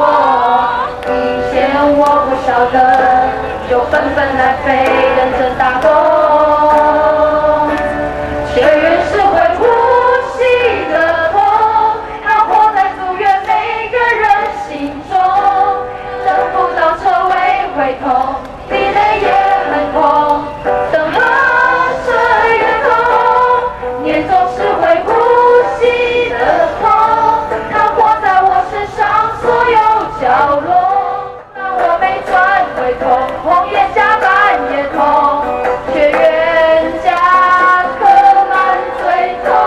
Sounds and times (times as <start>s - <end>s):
Female singing: 0.0s - 7.8s, 8.5s - 39.6s
Music: 0.0s - 39.6s.